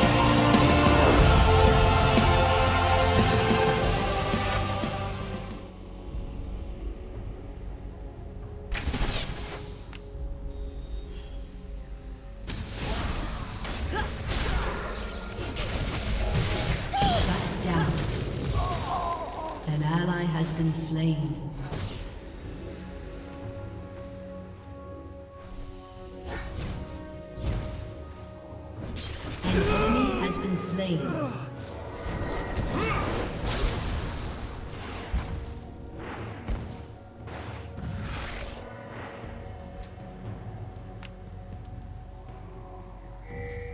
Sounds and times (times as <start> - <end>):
Music: 0.0 - 43.7
Speech: 18.6 - 21.5, 29.5 - 31.5.